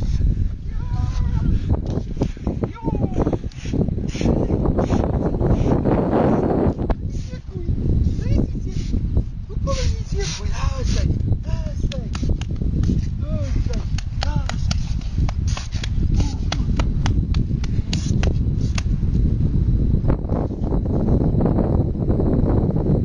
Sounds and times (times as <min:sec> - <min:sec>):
Outside, rural or natural: 0:00.0 - 0:23.0
Speech: 0:07.2 - 0:08.9, 0:09.5 - 0:12.2.